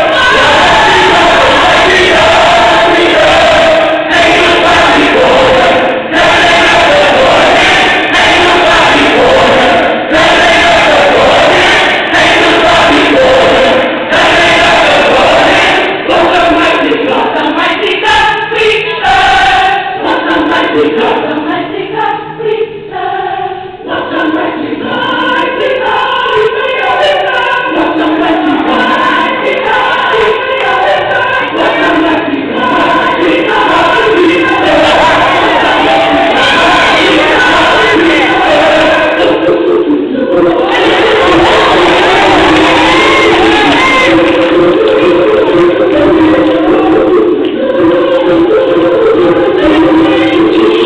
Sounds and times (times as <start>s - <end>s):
Choir: 0.0s - 50.8s
Inside, large room or hall: 0.0s - 50.8s.